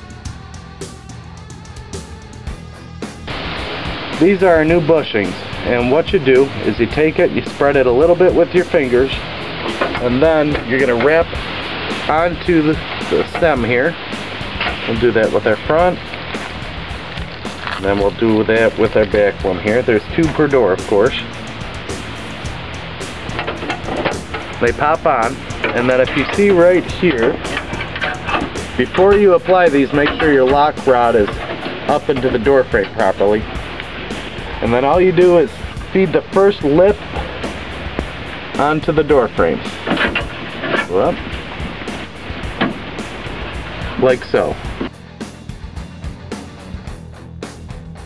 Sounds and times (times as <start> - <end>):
Music: 0.0 - 48.0
Speech: 4.2 - 9.2, 10.0 - 11.4, 12.0 - 14.0, 14.8 - 16.0, 17.8 - 21.3, 24.6 - 27.4, 28.8 - 33.5, 34.6 - 37.0, 38.6 - 39.7, 40.7 - 41.2, 43.9 - 44.6.